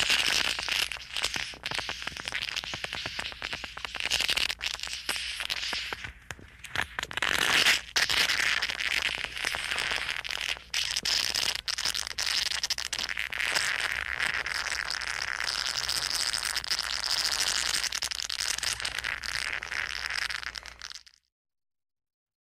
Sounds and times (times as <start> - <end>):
Crackle: 0.0 - 21.3.